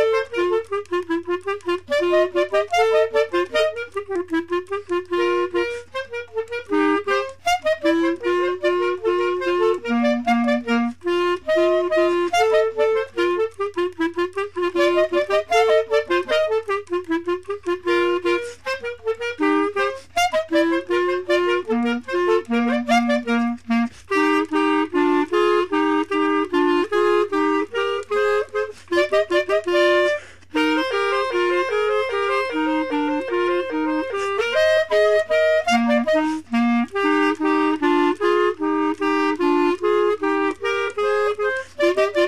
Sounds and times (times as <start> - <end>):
Music: 0.0 - 42.2.